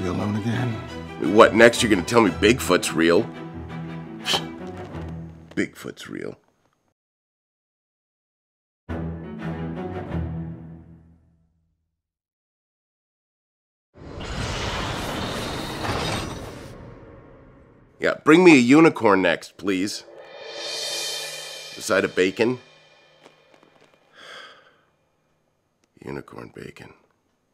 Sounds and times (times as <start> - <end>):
Music: 0.0 - 5.6, 8.9 - 11.8, 20.2 - 24.2
Silence: 14.0 - 18.0, 19.6 - 25.5.